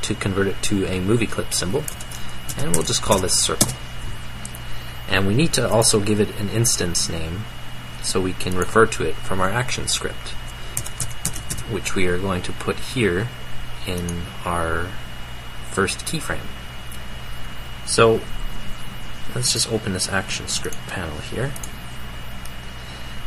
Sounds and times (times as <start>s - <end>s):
Speech: 0.0s - 1.9s, 2.5s - 3.8s, 5.1s - 10.4s, 11.7s - 15.0s, 15.7s - 16.6s, 17.9s - 18.3s, 19.3s - 21.6s.